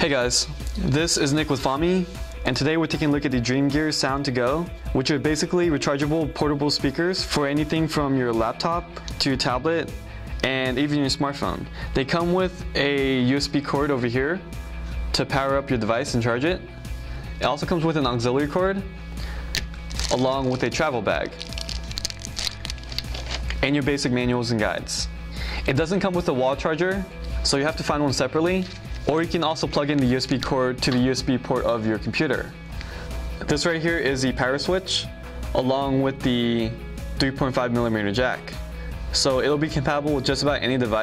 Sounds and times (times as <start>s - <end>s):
Speech: 0.0s - 14.4s, 15.1s - 16.7s, 17.4s - 18.9s, 20.1s - 21.4s, 23.6s - 25.1s, 25.7s - 32.5s, 33.4s - 38.6s, 39.2s - 41.0s
Music: 0.0s - 41.0s.